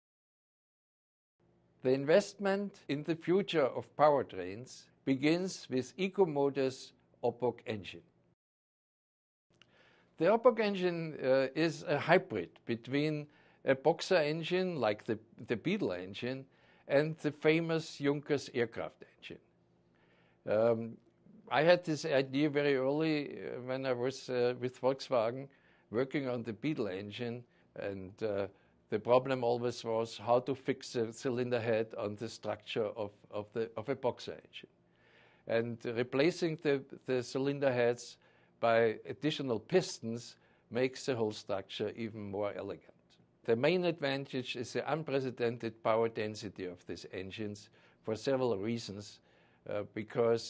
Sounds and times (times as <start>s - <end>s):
Speech: 1.8s - 8.1s, 10.2s - 19.5s, 20.5s - 34.7s, 35.5s - 50.4s.